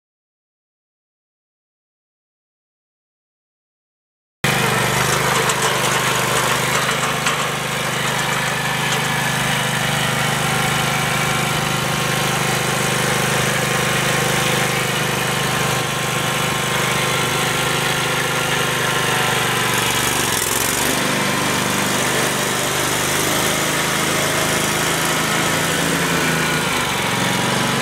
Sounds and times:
Lawn mower: 0:04.4 - 0:27.8
Power tool: 0:04.5 - 0:27.8.

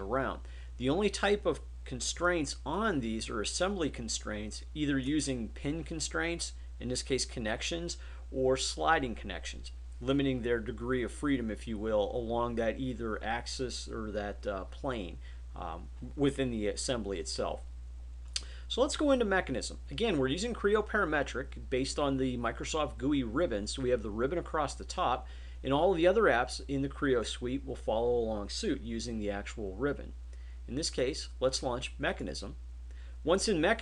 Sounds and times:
Speech: 0:00.0 - 0:17.7, 0:18.7 - 0:32.6, 0:33.2 - 0:33.8.

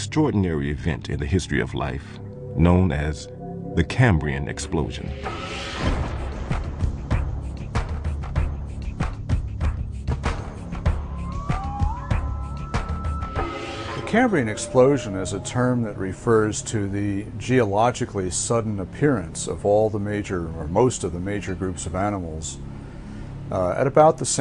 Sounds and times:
Speech: 0:00.0 - 0:05.2, 0:14.1 - 0:22.6, 0:23.5 - 0:24.4
Music: 0:00.0 - 0:24.4.

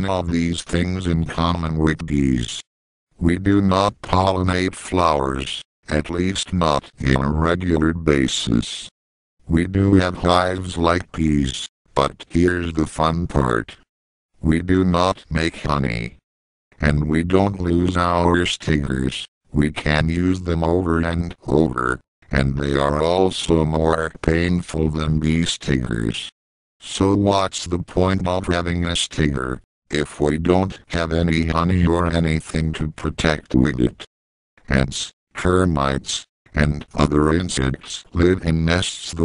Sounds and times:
Speech synthesizer: 0:00.0 - 0:16.2, 0:16.8 - 0:39.2.

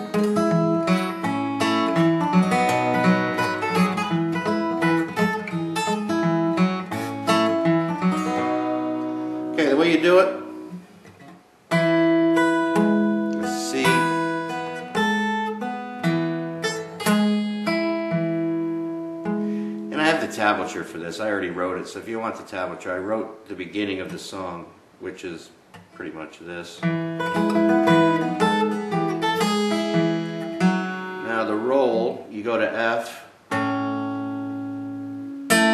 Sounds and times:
Acoustic guitar: 0:00.0 - 0:35.7
Speech: 0:09.6 - 0:10.5, 0:13.4 - 0:14.2, 0:19.9 - 0:26.9, 0:31.2 - 0:33.4.

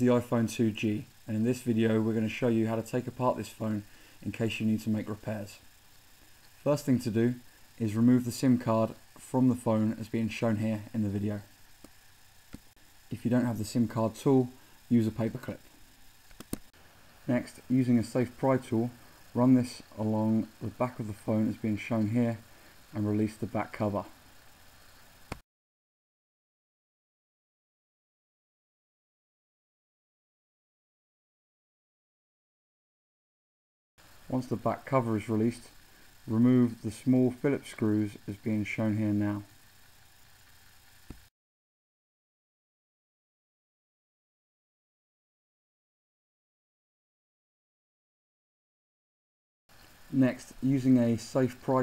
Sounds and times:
Speech: 0:00.0 - 0:05.7, 0:06.6 - 0:11.5, 0:13.1 - 0:15.6, 0:17.3 - 0:24.2, 0:34.3 - 0:39.5, 0:50.1 - 0:51.8.

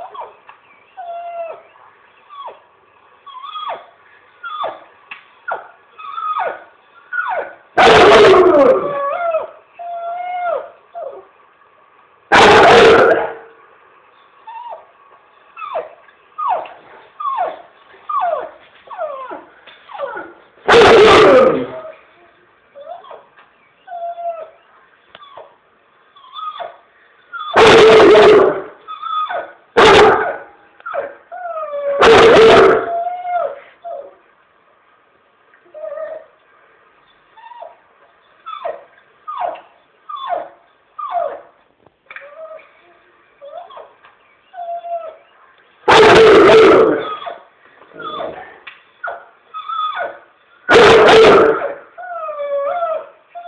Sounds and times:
Whimper (dog): 0:00.0 - 0:02.6, 0:03.3 - 0:04.8, 0:05.5 - 0:07.6, 0:08.5 - 0:11.2, 0:15.6 - 0:20.4, 0:22.8 - 0:25.6, 0:26.2 - 0:27.6, 0:28.9 - 0:29.6, 0:30.8 - 0:32.0, 0:32.6 - 0:34.2, 0:35.7 - 0:36.3, 0:37.4 - 0:37.8, 0:38.4 - 0:41.5, 0:42.2 - 0:42.8, 0:43.4 - 0:45.3, 0:46.9 - 0:50.2, 0:52.0 - 0:53.4
Bow-wow: 0:12.3 - 0:13.4, 0:20.7 - 0:21.8, 0:29.8 - 0:30.4, 0:32.0 - 0:33.0, 0:45.9 - 0:47.2, 0:50.7 - 0:51.8.

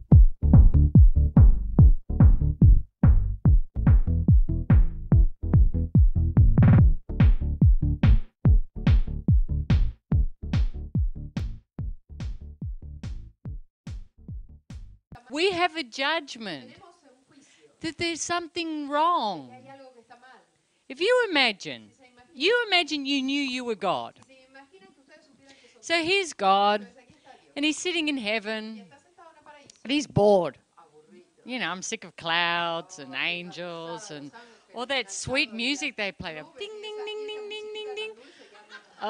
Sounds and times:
Speech: 0:15.2 - 0:39.1.

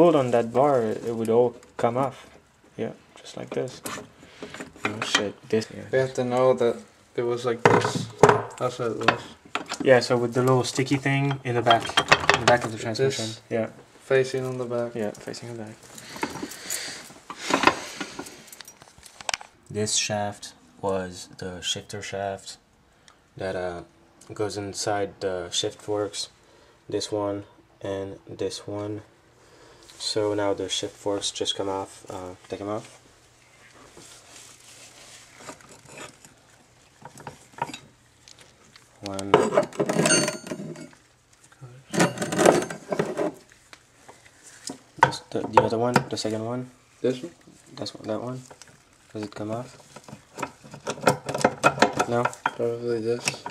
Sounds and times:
Speech: 0:00.0 - 0:02.2, 0:02.8 - 0:03.8, 0:04.9 - 0:09.2, 0:09.8 - 0:15.8, 0:19.7 - 0:22.6, 0:23.4 - 0:29.1, 0:30.0 - 0:33.0, 0:39.0 - 0:39.5, 0:45.0 - 0:48.5, 0:49.1 - 0:49.8, 0:52.0 - 0:53.4.

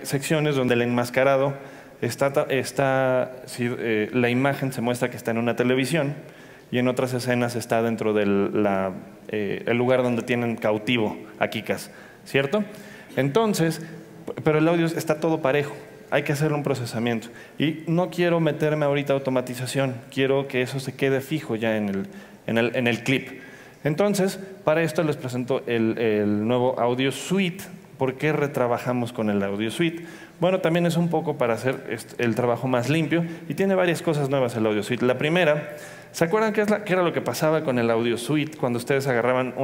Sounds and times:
Speech: 0:00.0 - 0:39.6.

